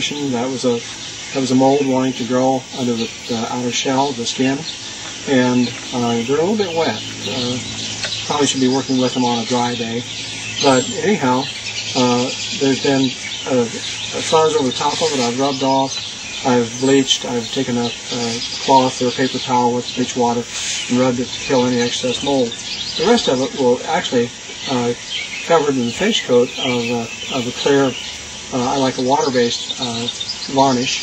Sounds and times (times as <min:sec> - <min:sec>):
Speech: 0:00.0 - 0:00.8, 0:01.4 - 0:04.7, 0:05.3 - 0:07.7, 0:08.3 - 0:31.0
Bird: 0:00.0 - 0:31.0.